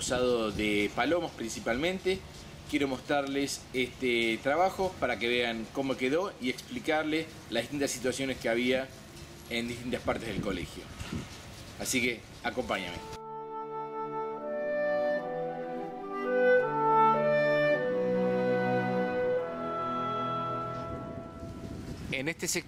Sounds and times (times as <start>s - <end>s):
Speech: 0.0s - 8.9s, 9.5s - 10.9s, 11.8s - 13.2s, 22.1s - 22.6s.